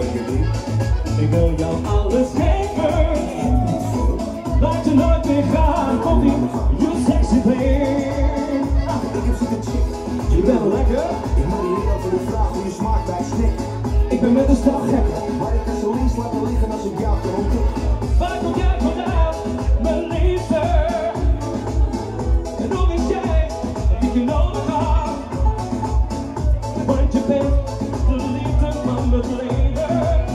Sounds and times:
Music: 0:00.0 - 0:30.3
Speech: 0:03.2 - 0:19.2.

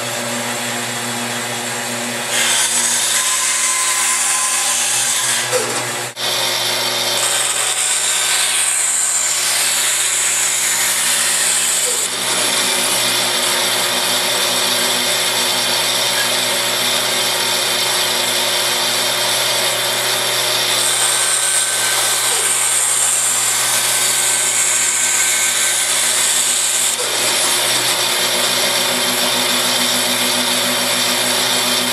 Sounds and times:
Power tool: 0:00.0 - 0:31.9.

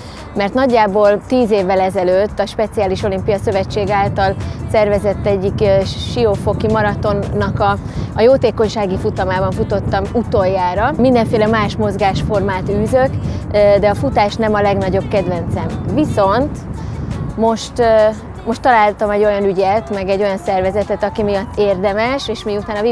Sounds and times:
Music: 0:00.0 - 0:22.9
Outside, urban or manmade: 0:00.0 - 0:22.9
Speech: 0:00.4 - 0:16.6, 0:17.4 - 0:22.9.

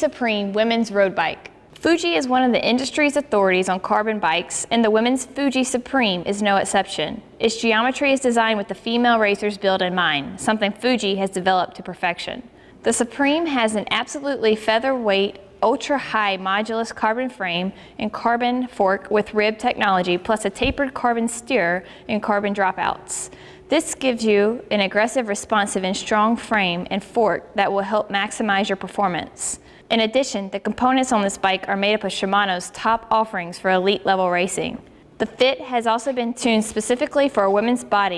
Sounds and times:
Speech: 0:00.0 - 0:38.1.

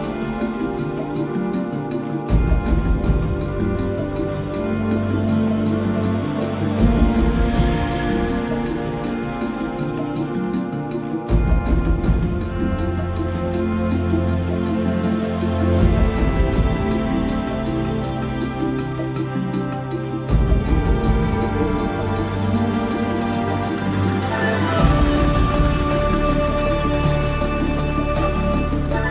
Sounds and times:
New-age music: 0:00.0 - 0:29.1.

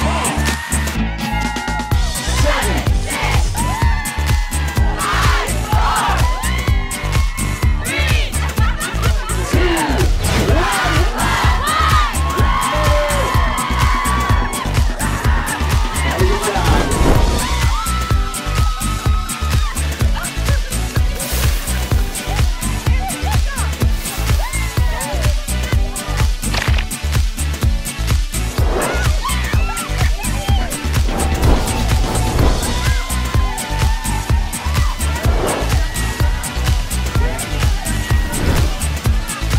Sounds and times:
Music: 0:00.0 - 0:39.5.

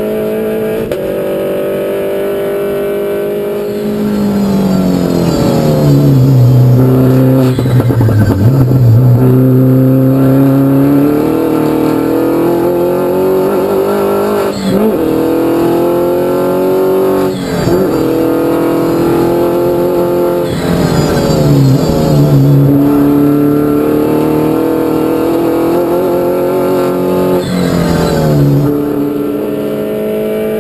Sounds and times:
Car: 0:00.0 - 0:30.6.

